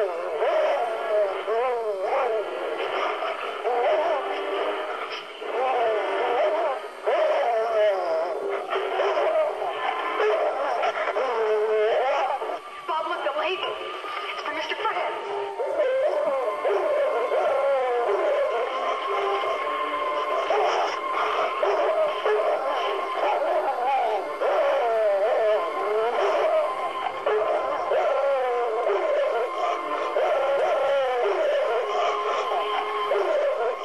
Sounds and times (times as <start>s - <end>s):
Music: 0.0s - 33.8s
Speech: 12.9s - 15.2s.